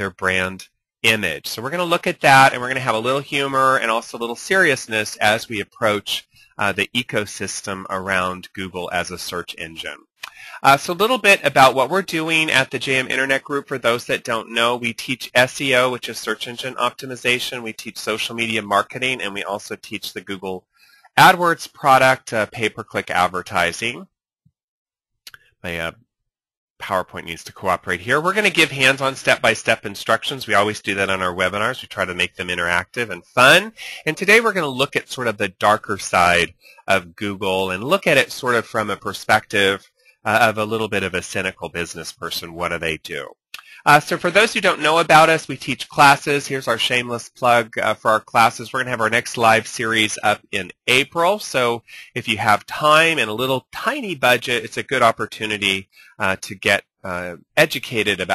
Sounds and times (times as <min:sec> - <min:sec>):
Speech: 0:00.0 - 0:20.6, 0:21.2 - 0:24.1, 0:25.7 - 0:26.0, 0:26.8 - 0:58.3.